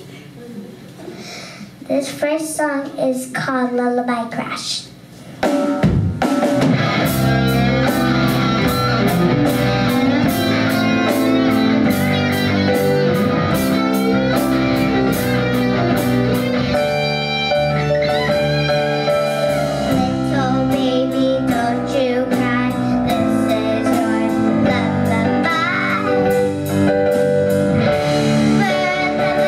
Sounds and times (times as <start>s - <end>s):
Speech: 1.9s - 4.9s
Music: 5.4s - 29.4s.